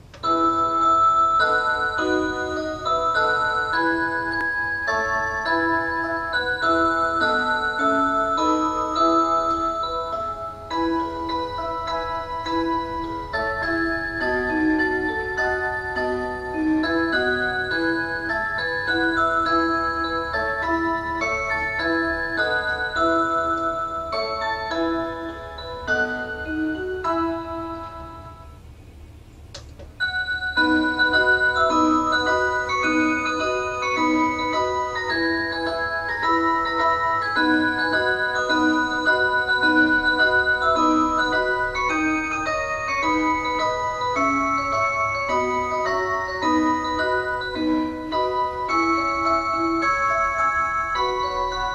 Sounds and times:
Music: 0.0s - 28.6s, 30.0s - 51.7s.

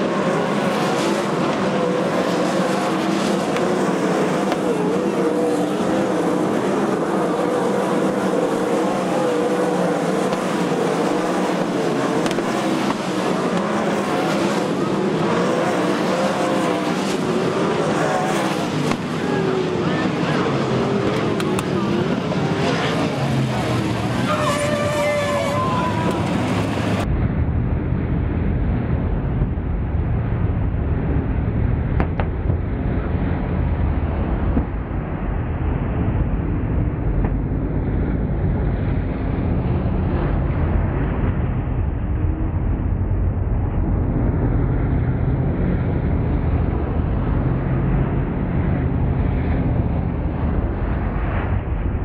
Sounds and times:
Car: 0.0s - 52.0s.

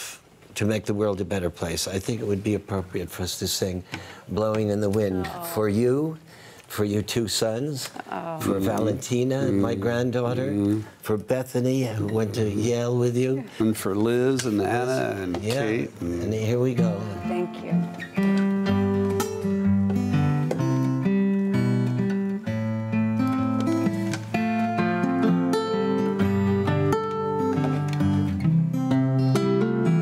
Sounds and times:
Speech: 0.6s - 6.1s, 6.7s - 17.8s
Acoustic guitar: 3.8s - 30.0s.

